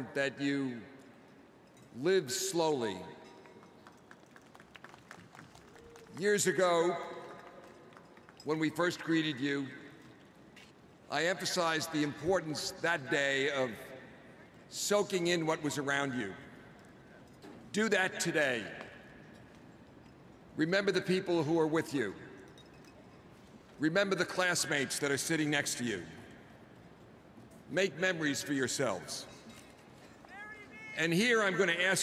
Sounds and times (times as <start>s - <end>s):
Male speech, man speaking: 0.0s - 0.8s, 2.0s - 3.2s, 6.2s - 7.2s, 8.5s - 9.8s, 11.1s - 13.9s, 14.7s - 16.4s, 17.7s - 18.7s, 20.6s - 22.2s, 23.8s - 26.2s, 27.7s - 29.3s, 30.8s - 32.0s
Narration, monologue: 0.0s - 4.5s, 6.1s - 32.0s.